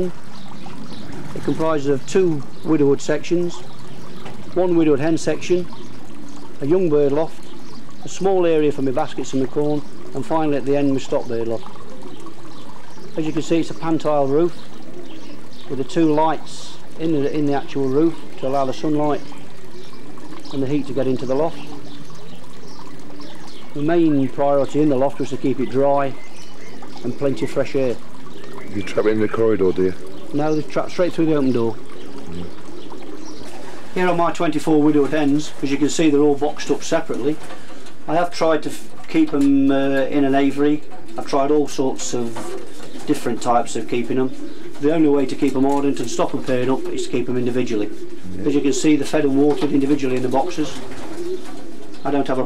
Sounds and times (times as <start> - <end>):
Speech: 1.4 - 3.6, 4.6 - 5.7, 6.6 - 7.4, 8.0 - 11.7, 13.2 - 14.6, 15.7 - 19.3, 20.6 - 21.6, 23.8 - 26.2, 27.0 - 28.0, 28.7 - 31.8, 34.0 - 37.4, 38.1 - 42.4, 43.1 - 50.8, 52.0 - 52.4
Pigeon, dove: 11.5 - 15.7, 18.0 - 34.0, 40.8 - 52.4.